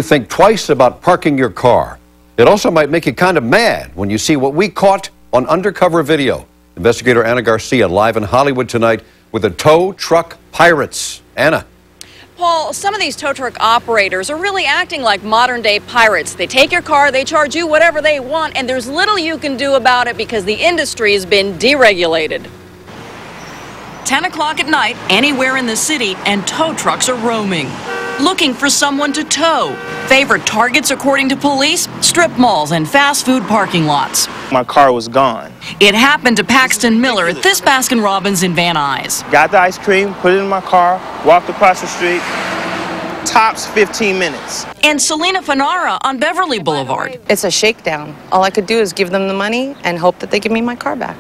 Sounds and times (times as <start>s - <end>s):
Car: 22.9s - 34.6s, 35.7s - 44.8s.